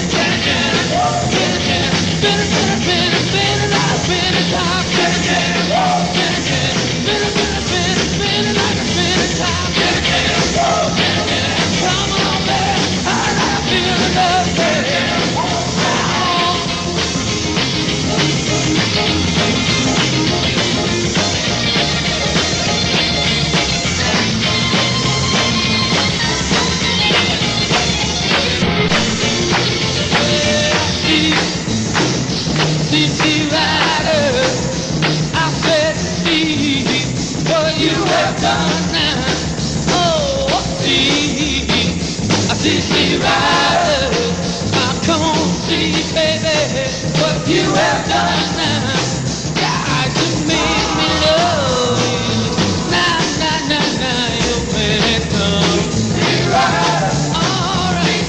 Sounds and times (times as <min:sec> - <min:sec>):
Singing: 0:00.0 - 0:16.9, 0:30.1 - 0:31.6, 0:32.9 - 0:34.8, 0:35.4 - 0:41.9, 0:42.5 - 0:58.2
Inside, large room or hall: 0:00.0 - 0:58.2
Music: 0:00.0 - 0:58.2.